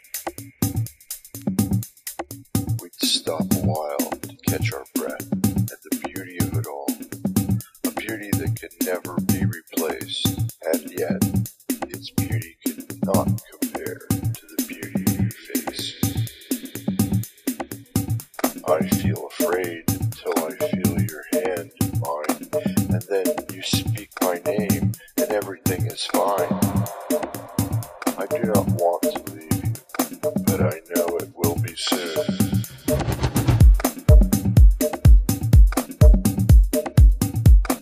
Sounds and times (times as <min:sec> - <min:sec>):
Music: 0:00.0 - 0:37.8
Speech: 0:02.8 - 0:07.0, 0:07.8 - 0:11.3, 0:12.0 - 0:16.3, 0:18.6 - 0:26.7, 0:28.2 - 0:29.8, 0:30.4 - 0:32.4.